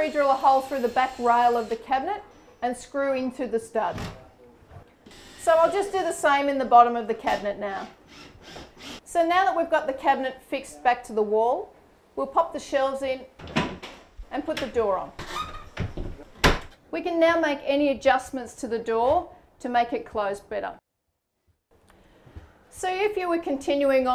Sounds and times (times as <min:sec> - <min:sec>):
Speech: 0:09.1 - 0:13.3, 0:14.3 - 0:15.2, 0:22.8 - 0:24.1
Door: 0:15.2 - 0:16.8.